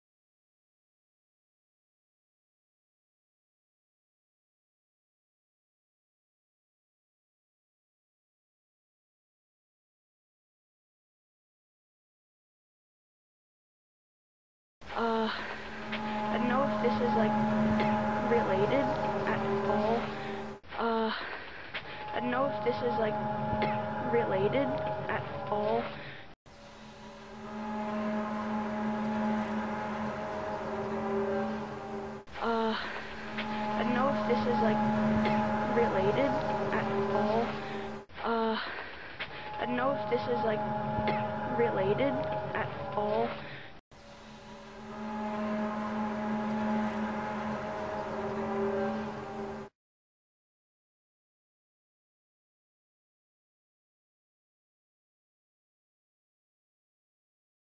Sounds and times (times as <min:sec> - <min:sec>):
Speech: 0:14.9 - 0:15.6, 0:16.3 - 0:21.3, 0:22.1 - 0:26.0, 0:32.4 - 0:33.0, 0:33.8 - 0:38.8, 0:39.6 - 0:43.5.